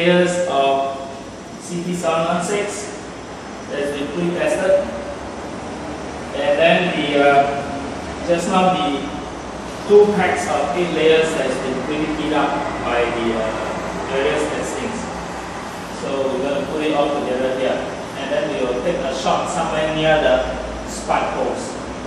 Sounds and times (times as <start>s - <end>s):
Speech: 0.0s - 3.0s, 3.7s - 5.1s, 6.3s - 9.2s, 9.9s - 15.1s, 16.0s - 21.8s.